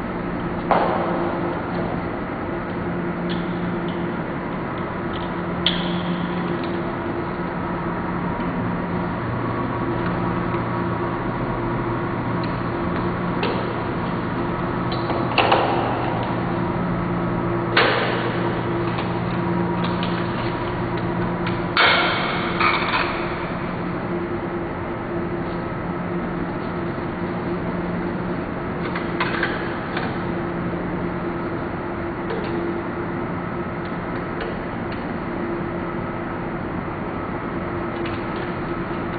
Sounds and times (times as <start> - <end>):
Printer: 0.0 - 39.1.